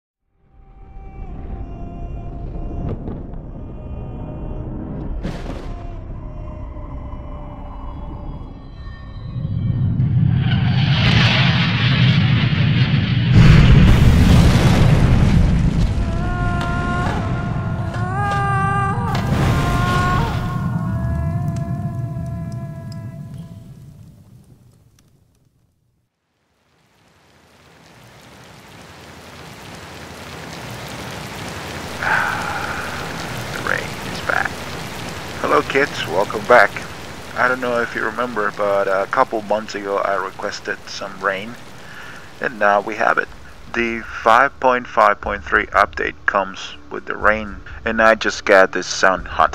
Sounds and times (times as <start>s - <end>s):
Hum: 0.3s - 49.5s.